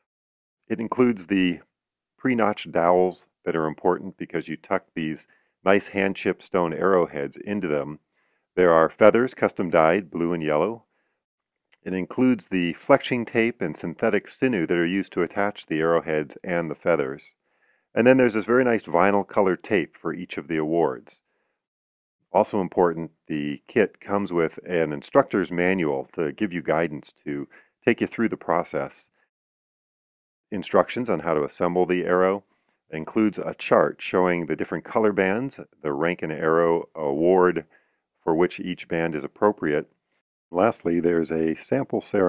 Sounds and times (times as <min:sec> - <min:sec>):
Speech: 0:00.7 - 0:08.0, 0:08.6 - 0:10.9, 0:11.8 - 0:17.4, 0:18.0 - 0:21.2, 0:22.3 - 0:29.2, 0:30.5 - 0:40.0, 0:40.6 - 0:42.2.